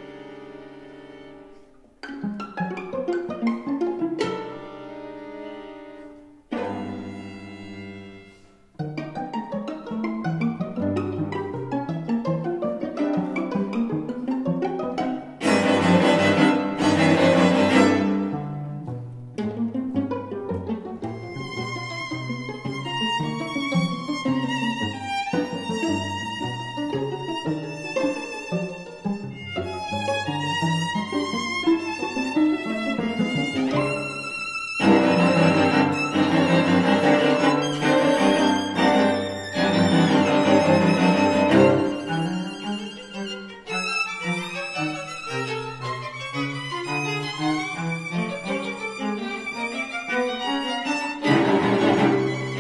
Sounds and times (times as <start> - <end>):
Cello: 0.0 - 52.6
Violin, fiddle: 0.0 - 52.6.